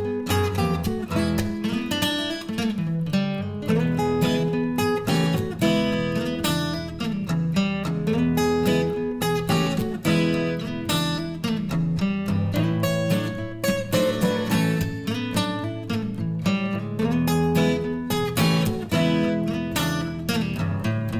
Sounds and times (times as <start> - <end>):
Music: 0.0 - 21.1.